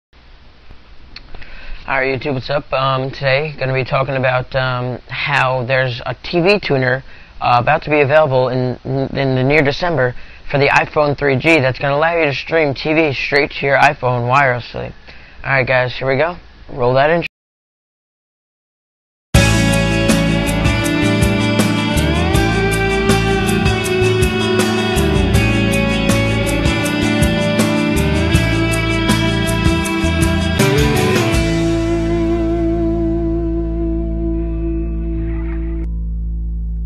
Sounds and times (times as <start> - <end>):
Male speech, man speaking: 1.9 - 17.3.